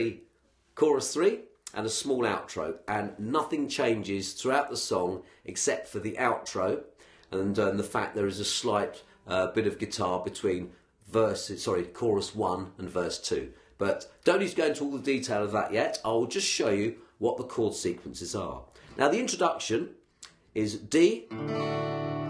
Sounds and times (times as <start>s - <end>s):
Speech: 0.0s - 0.2s, 0.8s - 21.3s.